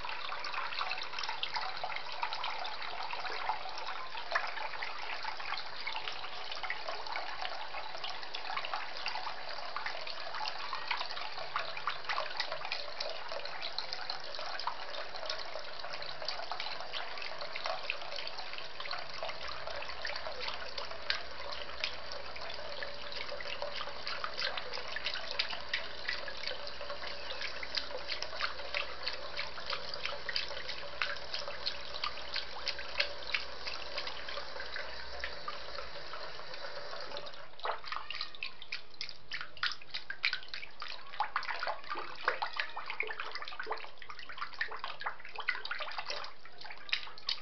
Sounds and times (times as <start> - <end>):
Sink (filling or washing): 0.0 - 47.4.